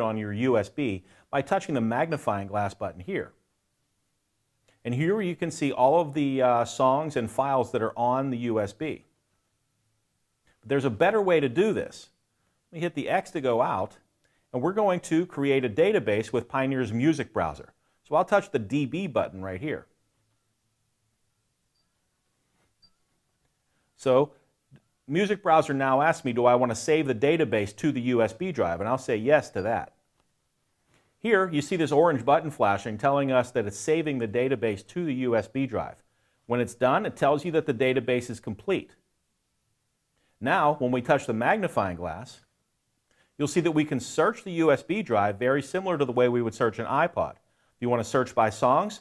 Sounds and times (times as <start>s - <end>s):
Speech: 0.0s - 3.4s, 4.8s - 9.1s, 10.6s - 12.1s, 12.7s - 19.9s, 24.0s - 24.4s, 25.1s - 30.0s, 31.2s - 39.0s, 40.4s - 42.5s, 43.4s - 49.0s.